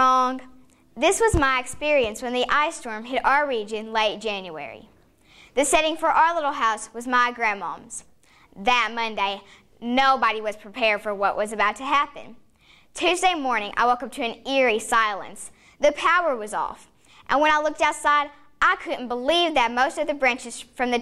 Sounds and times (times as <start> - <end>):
Child speech, kid speaking: 0.0 - 4.9, 5.6 - 8.0, 8.6 - 12.4, 13.0 - 21.0
Female speech, woman speaking: 0.0 - 4.9, 5.6 - 8.0, 8.6 - 12.4, 13.0 - 21.0
Narration, monologue: 0.0 - 21.0.